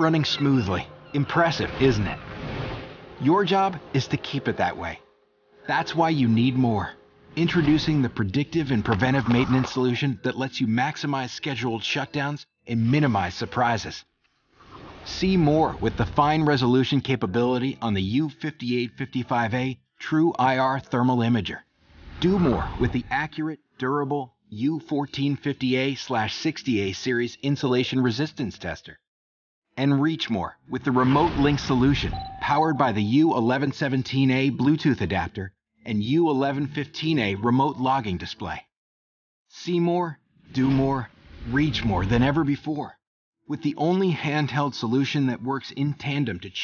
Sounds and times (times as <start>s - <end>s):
Speech: 0.0s - 2.2s, 3.2s - 5.1s, 5.7s - 14.1s, 15.1s - 21.6s, 22.2s - 29.0s, 29.8s - 38.7s, 39.5s - 46.6s.